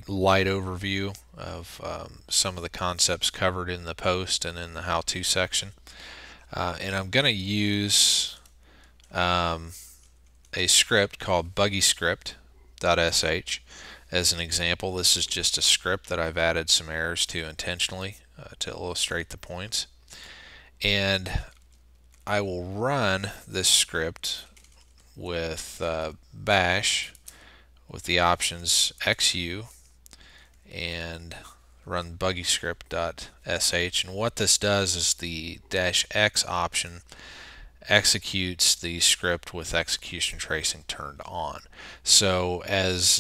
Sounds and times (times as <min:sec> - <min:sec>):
Speech: 0:00.0 - 0:05.8, 0:06.5 - 0:08.5, 0:09.1 - 0:09.9, 0:10.5 - 0:20.0, 0:20.8 - 0:21.6, 0:22.2 - 0:24.6, 0:25.2 - 0:27.2, 0:27.9 - 0:29.8, 0:30.7 - 0:37.1, 0:37.8 - 0:43.2.